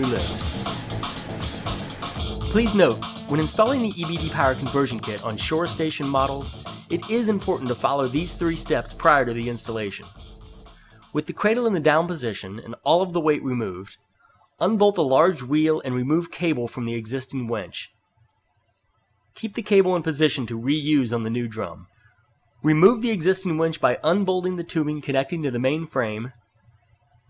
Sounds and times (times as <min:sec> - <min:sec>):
Speech: 0:00.0 - 0:00.4, 0:02.5 - 0:10.2, 0:11.2 - 0:14.0, 0:14.6 - 0:18.0, 0:19.4 - 0:21.9, 0:22.6 - 0:26.4
Music: 0:00.0 - 0:12.6.